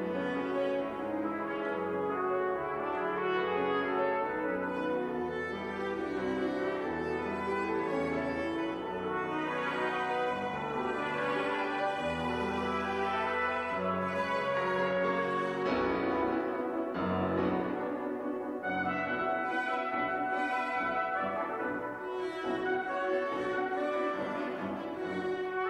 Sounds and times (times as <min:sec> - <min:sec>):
Musical instrument: 0:00.0 - 0:25.7.